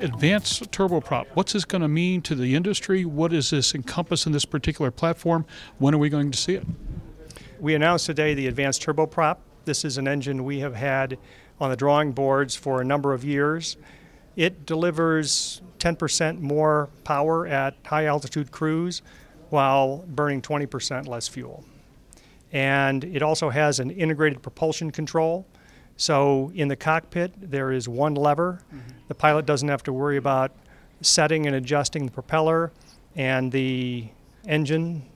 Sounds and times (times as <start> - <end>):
Speech: 0.0 - 21.7, 22.5 - 35.1.